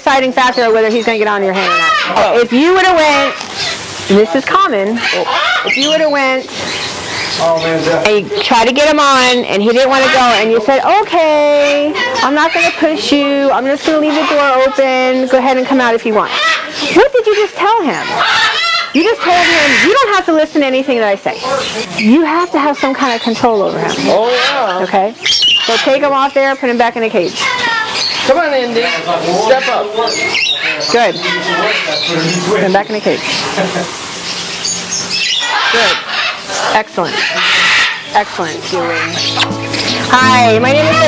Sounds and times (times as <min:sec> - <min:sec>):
Speech: 0:04.1 - 0:06.5, 0:07.4 - 0:18.2, 0:19.0 - 0:33.3.